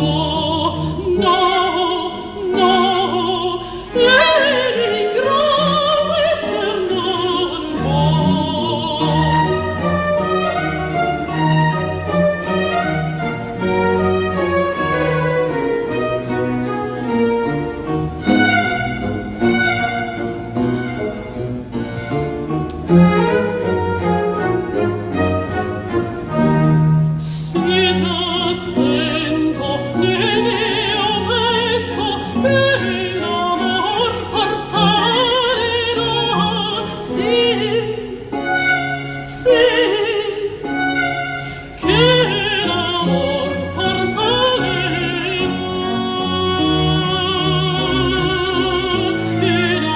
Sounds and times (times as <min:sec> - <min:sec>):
Orchestra: 0:00.0 - 0:49.9
String section: 0:00.0 - 0:49.9.